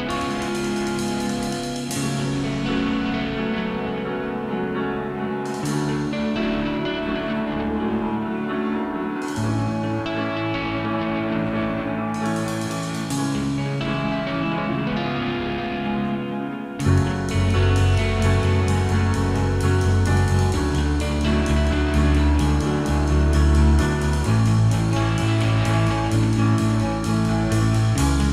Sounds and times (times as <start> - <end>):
Music: 0.0 - 28.3.